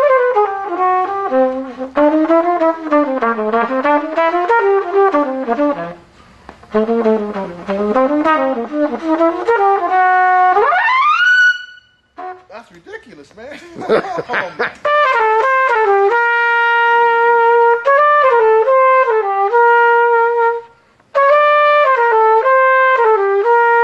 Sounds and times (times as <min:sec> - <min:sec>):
Trumpet: 0:00.0 - 0:13.2, 0:14.8 - 0:23.8.